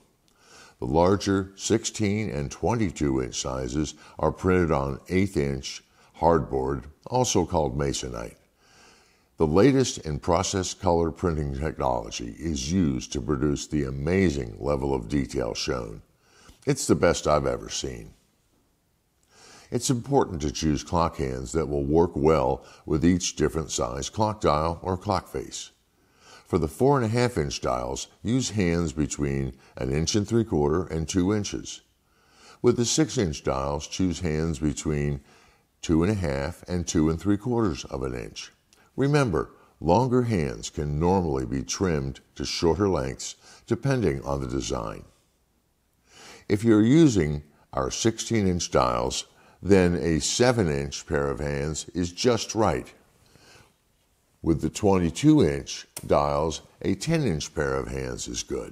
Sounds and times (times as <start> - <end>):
Speech: 0.8 - 8.5, 9.4 - 18.2, 19.7 - 25.8, 26.4 - 31.9, 32.6 - 45.2, 46.4 - 53.0, 54.4 - 58.7.